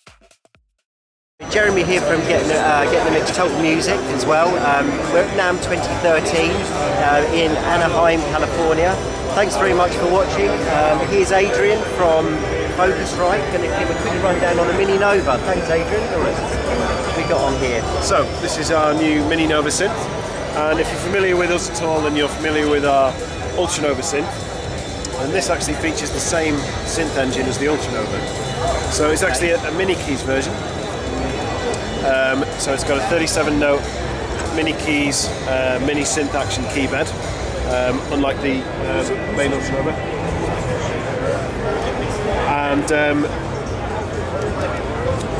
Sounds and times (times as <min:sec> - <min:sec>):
Speech: 0:01.4 - 0:24.4, 0:25.1 - 0:30.6, 0:31.6 - 0:40.0, 0:40.8 - 0:45.3.